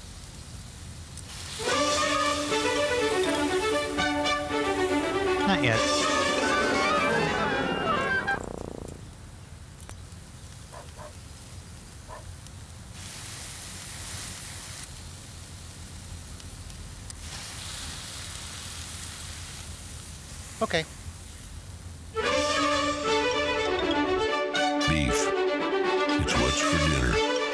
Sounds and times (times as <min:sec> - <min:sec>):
Music: 0:01.6 - 0:08.4, 0:22.2 - 0:27.5
Speech: 0:20.6 - 0:20.9, 0:24.8 - 0:25.3, 0:26.2 - 0:27.2.